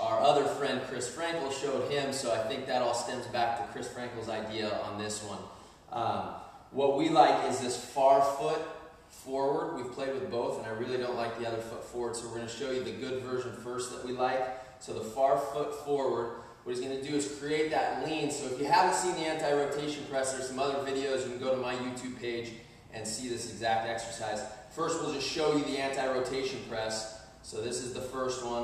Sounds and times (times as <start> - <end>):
Speech: 0.0 - 28.6.